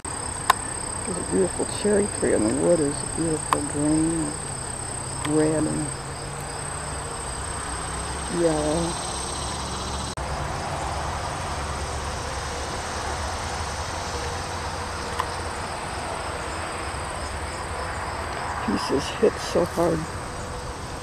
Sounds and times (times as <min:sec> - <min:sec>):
Speech: 0:01.1 - 0:04.4, 0:05.2 - 0:06.0, 0:08.3 - 0:09.0, 0:18.6 - 0:20.1.